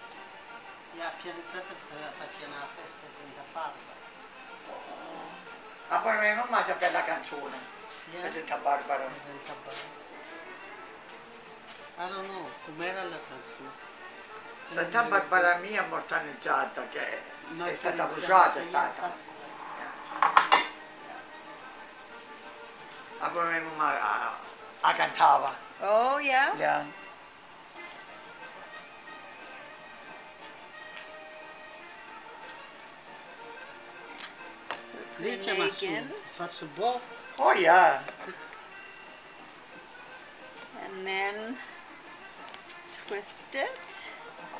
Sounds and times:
Dishes, pots, and pans: 20.2s - 20.8s.

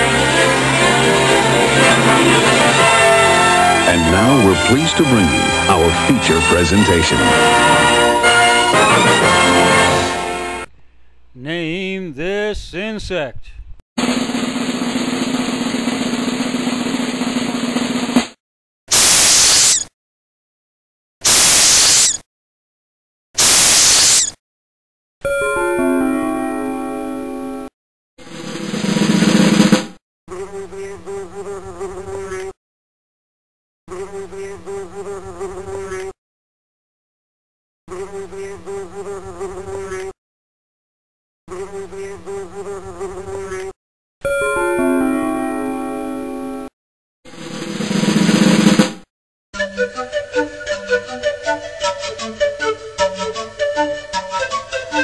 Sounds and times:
Bee, wasp, etc.: 30.3s - 32.6s, 33.9s - 36.2s, 37.9s - 40.2s, 41.5s - 43.8s
Fly, housefly: 30.3s - 32.6s, 33.9s - 36.2s, 37.9s - 40.2s, 41.5s - 43.8s.

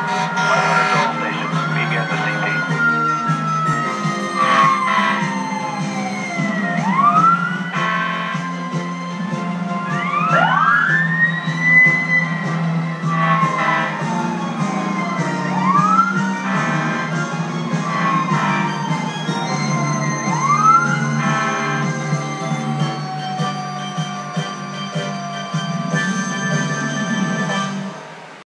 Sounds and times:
Music: 0.0s - 28.2s
Vehicle: 0.0s - 28.4s.

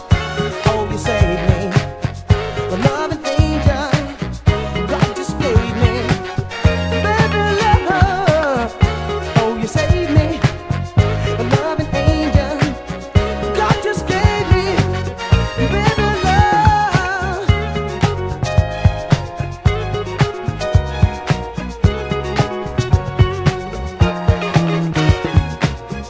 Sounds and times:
Funk: 0.0s - 26.1s
Soul music: 0.0s - 26.1s.

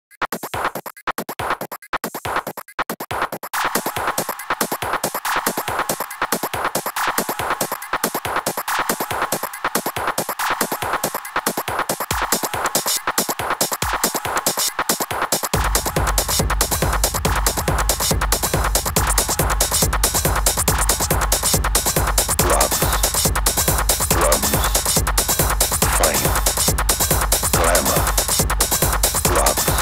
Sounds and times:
Techno: 0.2s - 29.8s.

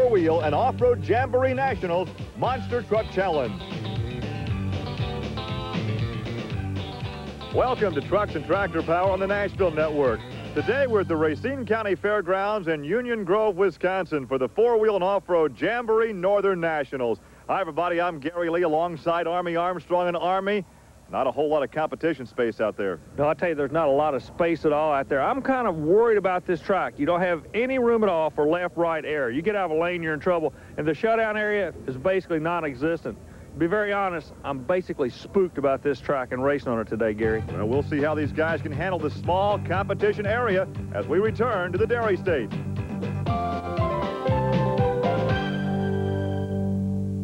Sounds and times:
Speech: 0.0s - 3.6s, 7.6s - 42.5s
Music: 0.0s - 12.1s, 37.2s - 47.2s.

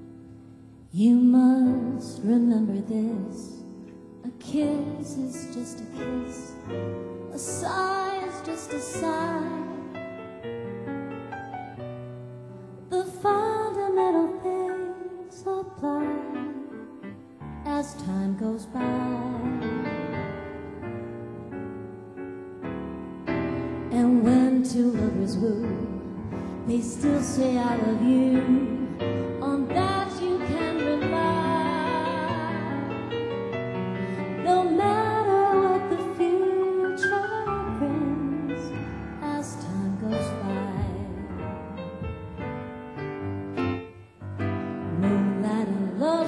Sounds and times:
Music: 0.0s - 46.2s.

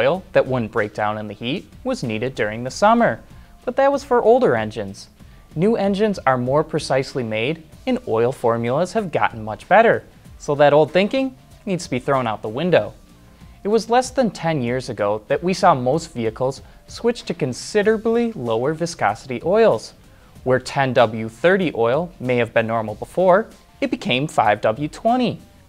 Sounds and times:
Speech: 0.0s - 13.0s, 13.6s - 25.5s
Music: 0.0s - 25.6s.

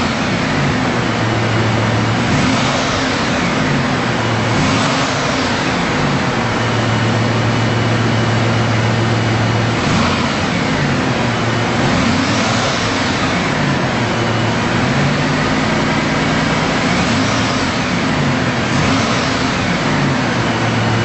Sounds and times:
Car: 0.0s - 21.0s.

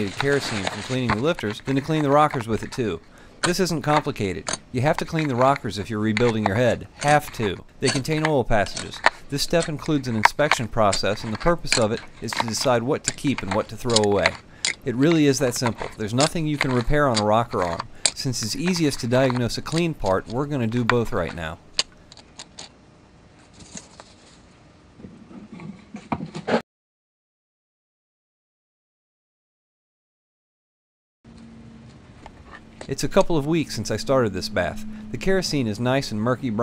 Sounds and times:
Speech: 0.0s - 21.6s, 32.9s - 36.6s.

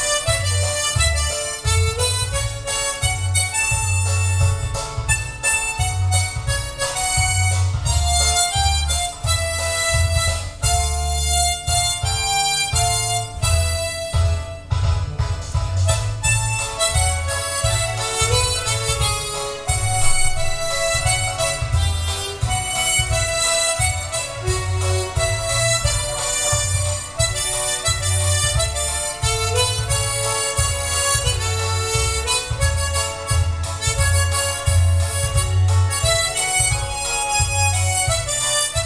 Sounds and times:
Harmonica: 0.0s - 38.8s.

